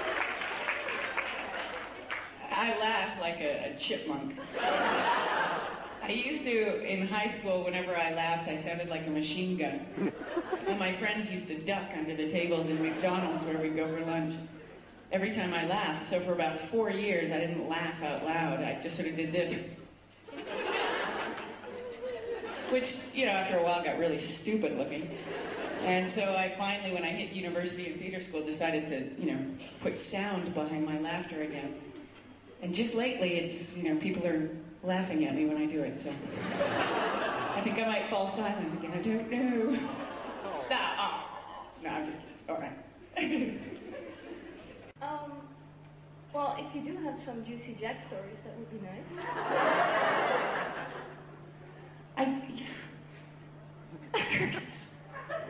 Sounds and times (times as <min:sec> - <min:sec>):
Speech: 0:02.4 - 0:04.4, 0:06.0 - 0:14.5, 0:15.1 - 0:19.8, 0:22.7 - 0:25.1, 0:25.8 - 0:31.8, 0:32.6 - 0:36.3, 0:37.6 - 0:43.7.